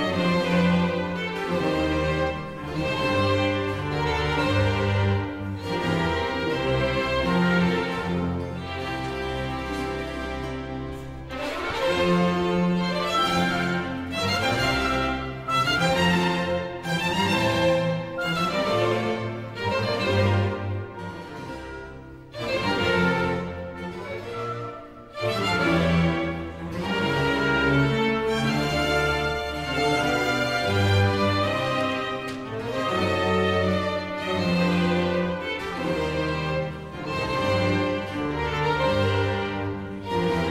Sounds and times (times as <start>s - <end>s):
Orchestra: 0.0s - 40.5s.